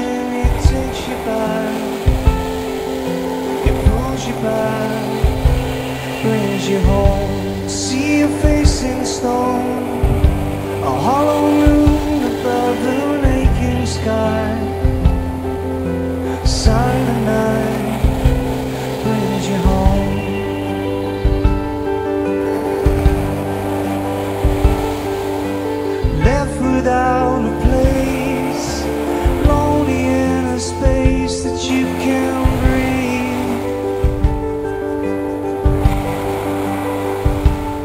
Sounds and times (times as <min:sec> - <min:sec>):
Music: 0:00.0 - 0:37.8.